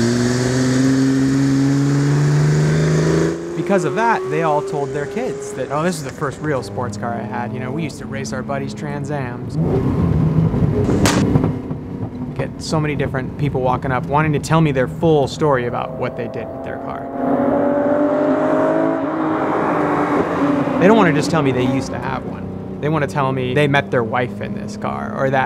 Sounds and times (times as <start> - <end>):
Race car, auto racing: 0.0 - 25.4.